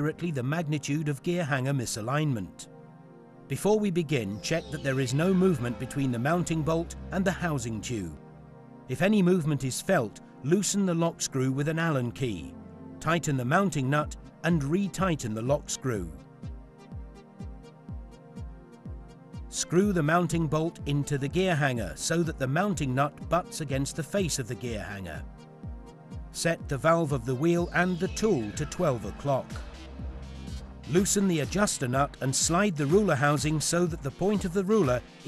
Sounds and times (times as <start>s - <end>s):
Speech: 0.0s - 2.7s, 3.5s - 8.2s, 8.9s - 16.2s, 19.5s - 25.2s, 26.4s - 29.6s, 30.9s - 35.0s
Music: 0.0s - 35.2s.